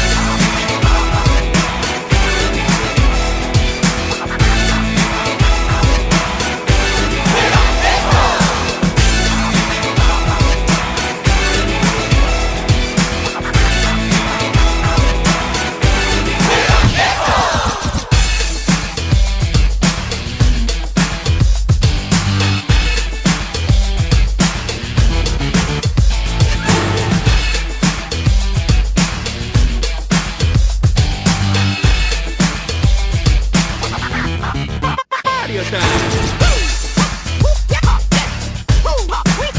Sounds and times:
Music: 0:00.0 - 0:39.5.

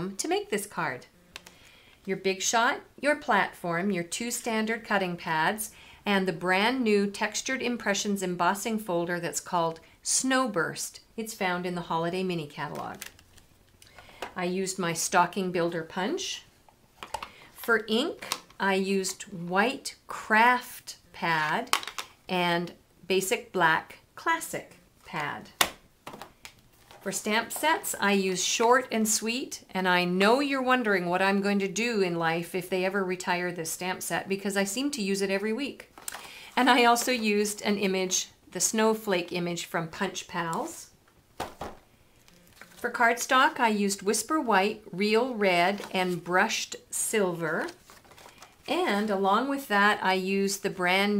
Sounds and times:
Speech: 0:00.0 - 0:01.1, 0:02.1 - 0:13.0, 0:14.4 - 0:16.5, 0:17.6 - 0:21.7, 0:22.3 - 0:25.5, 0:27.0 - 0:35.9, 0:36.6 - 0:40.9, 0:42.8 - 0:47.8, 0:48.7 - 0:51.1.

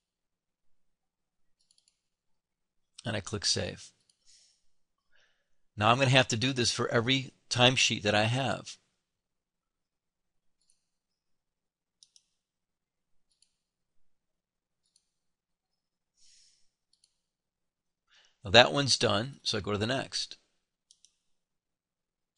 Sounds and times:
Speech: 0:03.0 - 0:04.0, 0:05.8 - 0:08.8, 0:18.5 - 0:20.4.

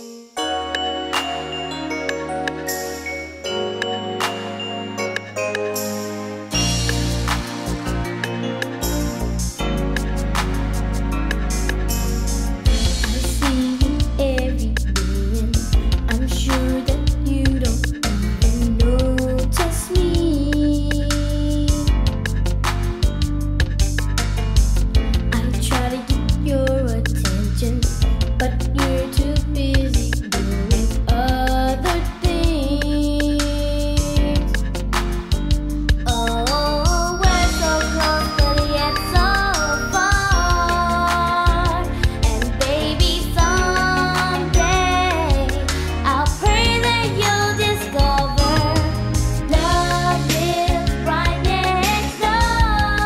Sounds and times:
Music: 0:00.0 - 0:53.0.

